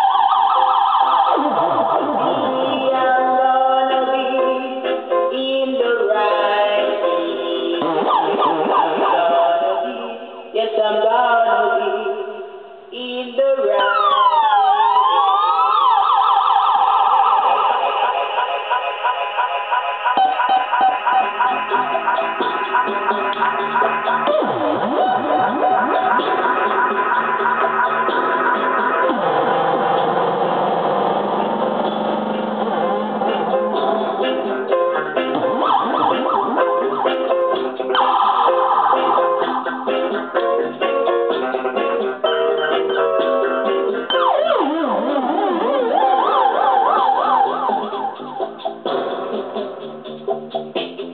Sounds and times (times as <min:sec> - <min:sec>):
Police car (siren): 0:00.0 - 0:03.3, 0:07.9 - 0:10.2, 0:13.8 - 0:31.4, 0:32.8 - 0:39.7, 0:44.1 - 0:48.6
Ambulance (siren): 0:00.0 - 0:04.1, 0:07.9 - 0:10.4, 0:13.8 - 0:29.9, 0:32.8 - 0:40.2, 0:44.0 - 0:48.6.